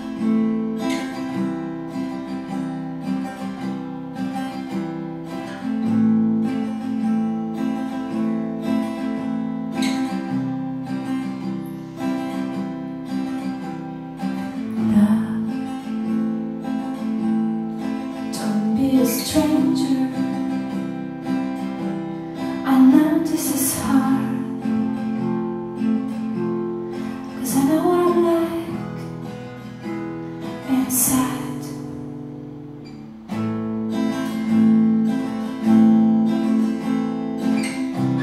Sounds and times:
Strum: 0:00.0 - 0:38.2.

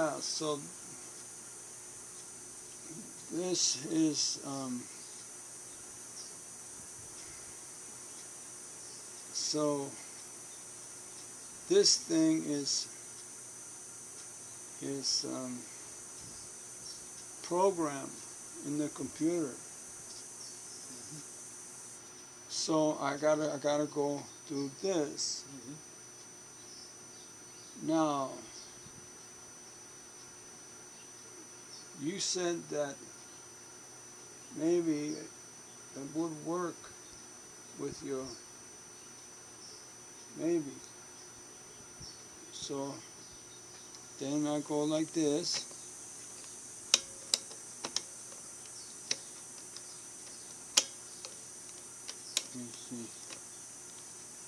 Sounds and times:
Speech: 0:00.0 - 0:00.7, 0:02.9 - 0:04.9, 0:09.4 - 0:10.0, 0:11.7 - 0:12.9, 0:14.8 - 0:15.7, 0:17.4 - 0:19.6, 0:22.5 - 0:25.8, 0:27.8 - 0:28.5, 0:32.0 - 0:33.1, 0:34.6 - 0:35.3, 0:36.0 - 0:36.9, 0:37.8 - 0:38.4, 0:40.4 - 0:40.9, 0:42.5 - 0:43.1, 0:44.2 - 0:45.6, 0:52.5 - 0:53.2.

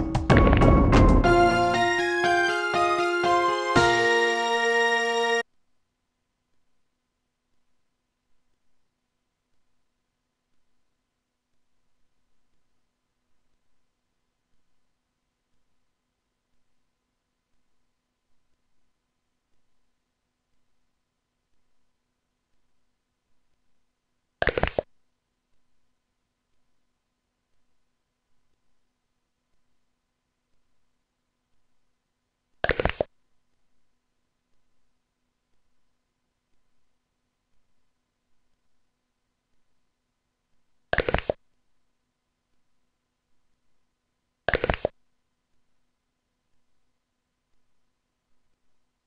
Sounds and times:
Silence: 0:05.4 - 0:49.0.

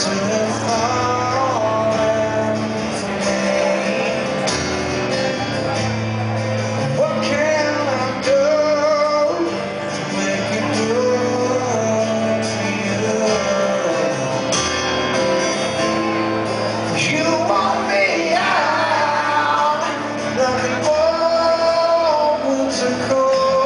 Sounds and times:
Music: 0:00.0 - 0:23.6.

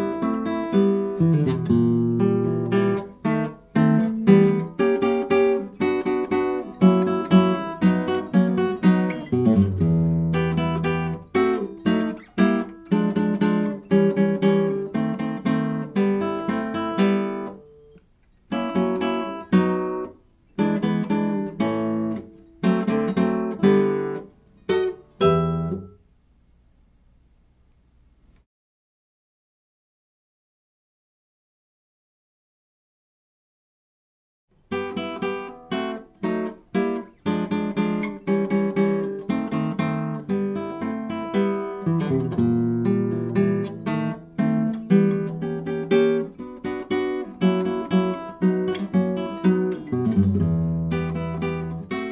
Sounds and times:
Acoustic guitar: 0:00.0 - 0:26.1, 0:34.6 - 0:52.1.

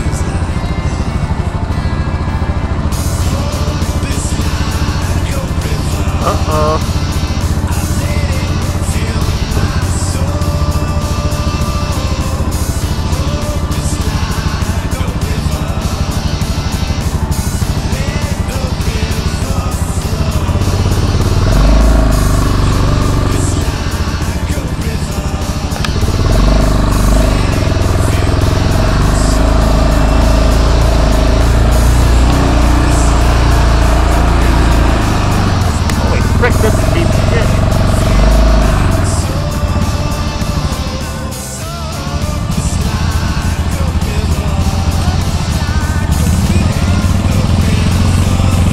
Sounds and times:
Motorcycle: 0:00.0 - 0:48.7
Music: 0:00.0 - 0:48.7.

